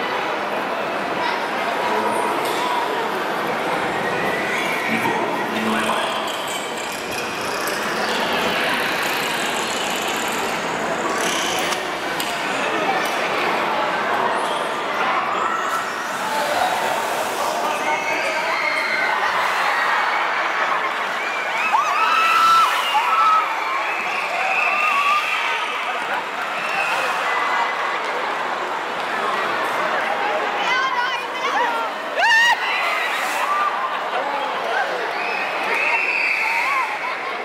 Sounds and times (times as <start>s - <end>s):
Speech: 0.0s - 6.3s, 10.7s - 21.2s, 22.7s - 37.4s
Water: 0.0s - 37.4s.